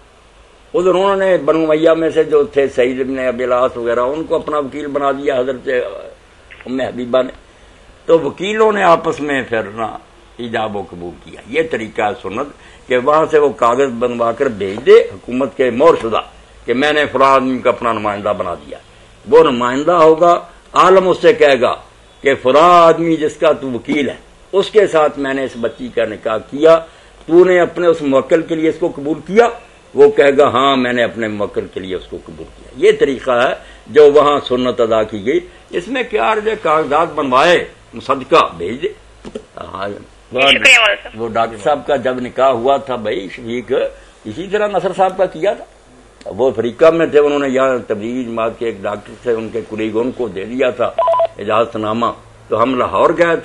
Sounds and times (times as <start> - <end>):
Speech: 0.8 - 7.4, 8.1 - 39.0, 39.6 - 53.4.